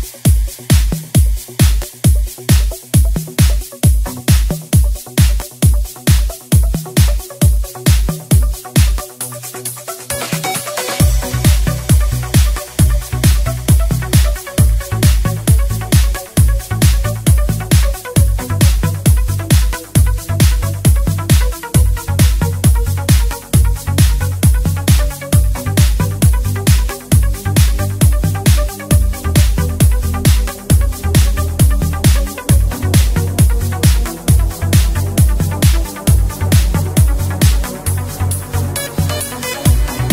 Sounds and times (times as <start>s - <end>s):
Exciting music: 8.4s - 40.1s.